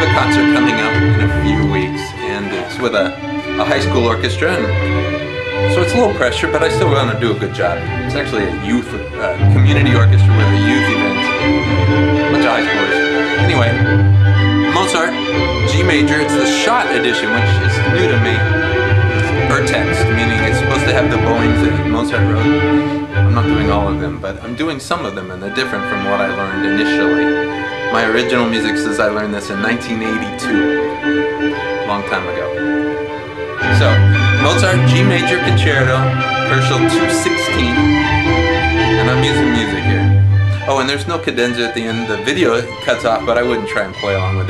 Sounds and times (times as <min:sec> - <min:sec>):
Speech: 0:00.0 - 0:04.8, 0:05.7 - 0:11.3, 0:12.3 - 0:13.8, 0:14.7 - 0:18.4, 0:19.3 - 0:22.6, 0:23.3 - 0:27.2, 0:27.9 - 0:30.7, 0:31.8 - 0:32.5, 0:33.7 - 0:37.9, 0:39.0 - 0:44.5
Violin, fiddle: 0:00.0 - 0:44.5.